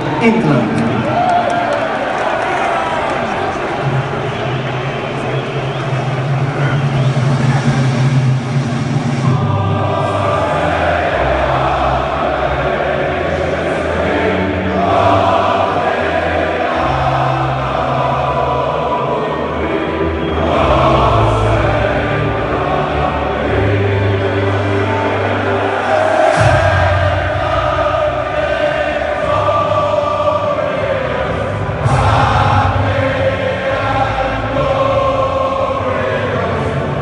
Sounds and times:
Choir: 0:00.0 - 0:37.0.

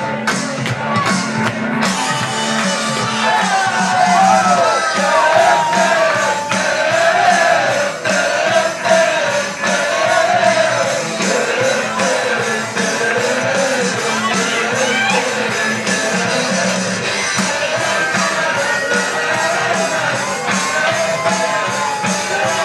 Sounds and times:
Music: 0:00.0 - 0:22.6.

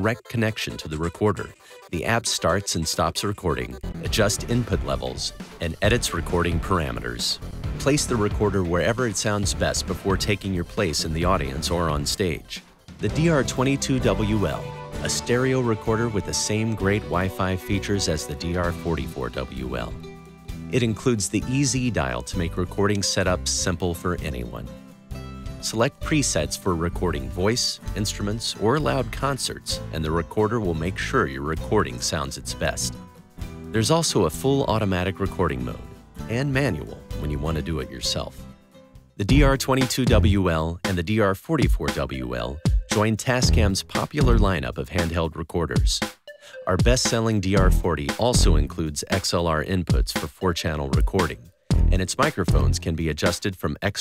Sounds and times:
Guitar: 0:00.0 - 0:53.4.

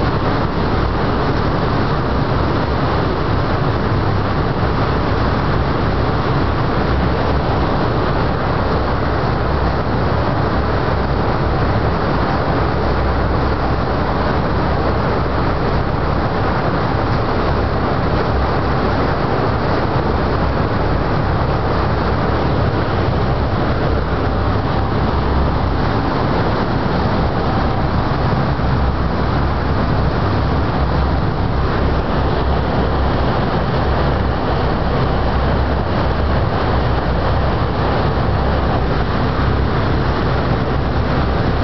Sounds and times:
Vehicle: 0:00.0 - 0:41.6.

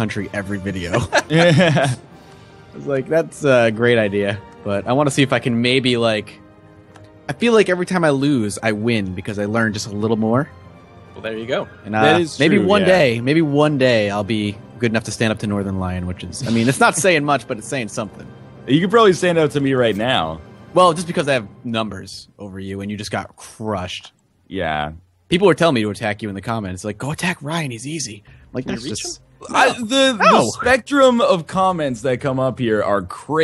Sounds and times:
Speech: 0:00.0 - 0:01.6, 0:02.8 - 0:06.4, 0:07.3 - 0:10.5, 0:11.2 - 0:33.4
Music: 0:00.0 - 0:33.4.

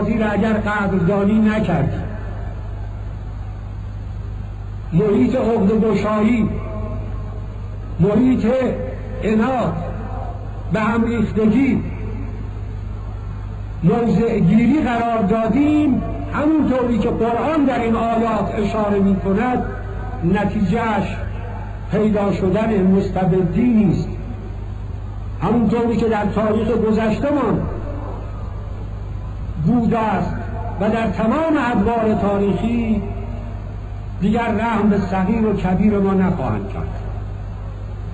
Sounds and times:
Male speech, man speaking: 0:00.0 - 0:02.1, 0:04.9 - 0:06.6, 0:08.0 - 0:09.9, 0:10.7 - 0:12.0, 0:13.8 - 0:24.2, 0:25.4 - 0:27.7, 0:29.6 - 0:33.2, 0:34.2 - 0:37.0
Narration, monologue: 0:00.0 - 0:38.1.

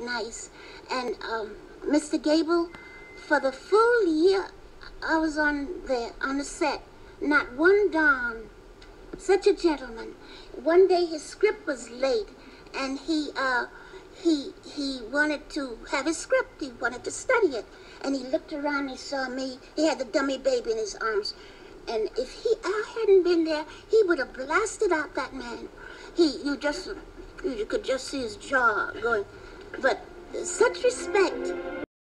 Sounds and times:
Speech: 0:00.0 - 0:08.5, 0:09.2 - 0:31.5
Music: 0:29.7 - 0:31.9.

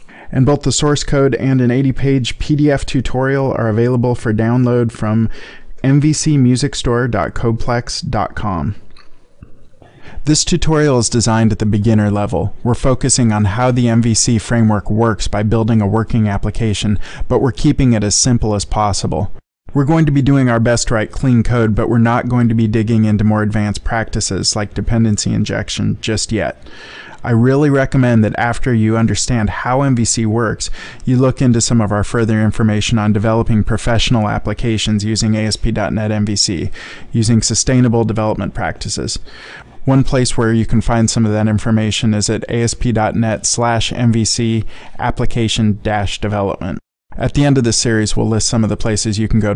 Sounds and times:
Speech: 0:00.3 - 0:08.8, 0:10.2 - 0:26.6, 0:27.2 - 0:49.5.

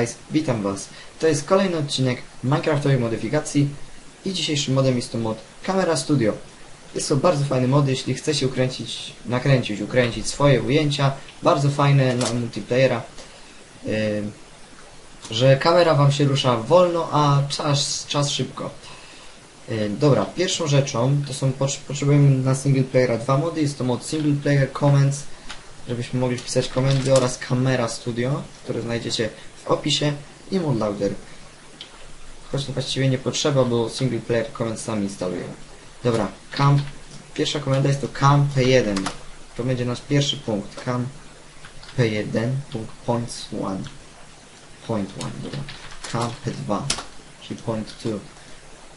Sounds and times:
Speech: 0:00.0 - 0:13.2, 0:13.8 - 0:14.4, 0:15.2 - 0:18.9, 0:19.6 - 0:25.3, 0:25.9 - 0:31.3, 0:32.4 - 0:41.2, 0:41.9 - 0:44.0, 0:44.8 - 0:48.4.

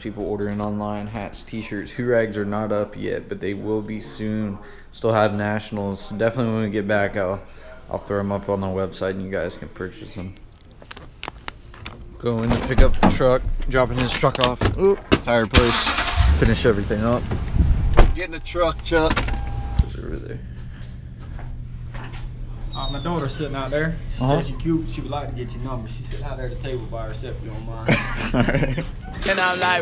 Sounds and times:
Speech: 0:00.0 - 0:10.4, 0:12.2 - 0:17.3.

